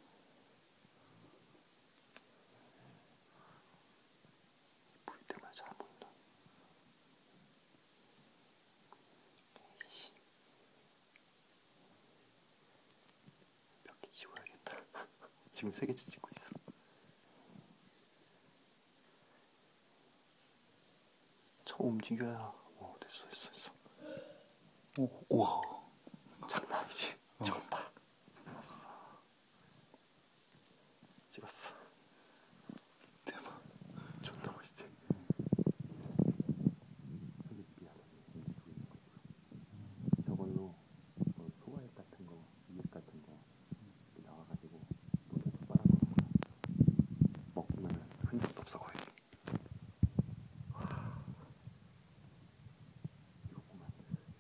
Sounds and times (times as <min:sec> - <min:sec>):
Speech: 0:15.5 - 0:16.6, 0:21.6 - 0:23.8, 0:26.4 - 0:29.0, 0:40.2 - 0:46.0, 0:47.6 - 0:49.1.